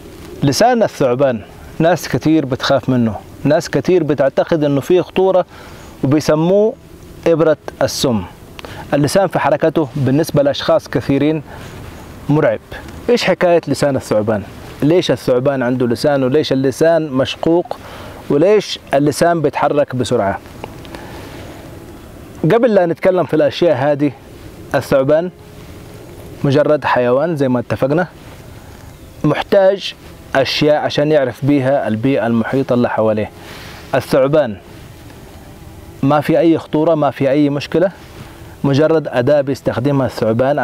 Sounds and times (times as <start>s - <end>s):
Outside, rural or natural: 0.0s - 40.6s
Speech: 0.4s - 11.5s, 12.3s - 20.4s, 22.4s - 25.4s, 26.4s - 28.1s, 29.2s - 33.3s, 33.9s - 34.6s, 36.0s - 38.0s, 38.6s - 40.6s.